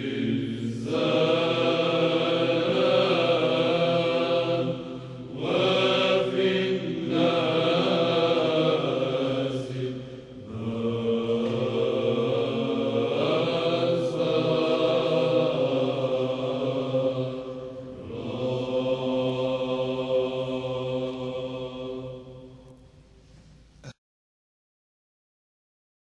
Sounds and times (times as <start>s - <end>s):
Choir: 0.0s - 23.1s
Chant: 0.0s - 24.0s.